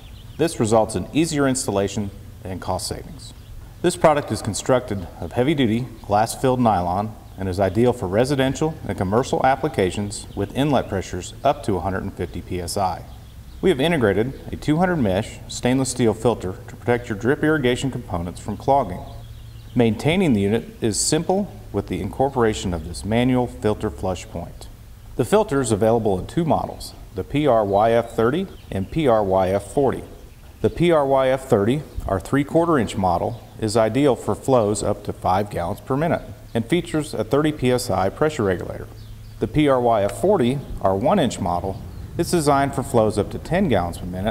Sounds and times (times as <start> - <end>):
Speech: 0.4 - 19.2, 19.8 - 44.3.